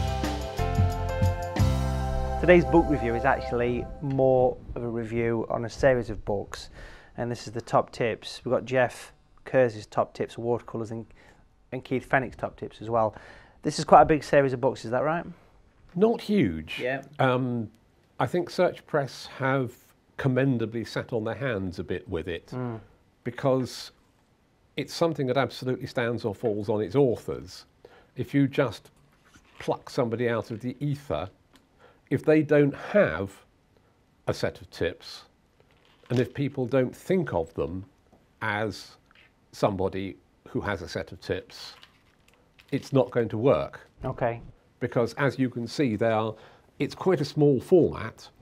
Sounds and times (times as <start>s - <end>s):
Speech: 2.4s - 11.1s, 11.7s - 24.0s, 24.8s - 28.9s, 29.6s - 31.4s, 32.1s - 33.5s, 34.3s - 35.3s, 36.1s - 39.0s, 39.6s - 41.8s, 42.7s - 48.4s.